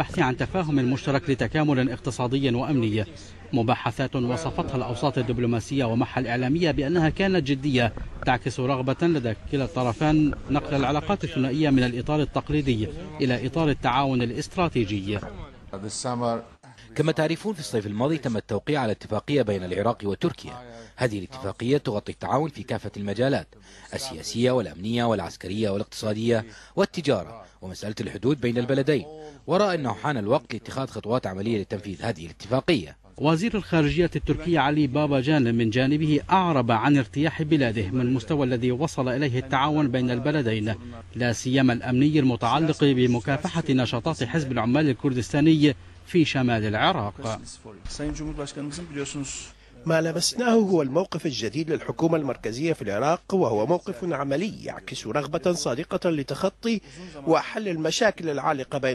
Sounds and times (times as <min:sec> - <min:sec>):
Speech: 0:00.0 - 0:58.9.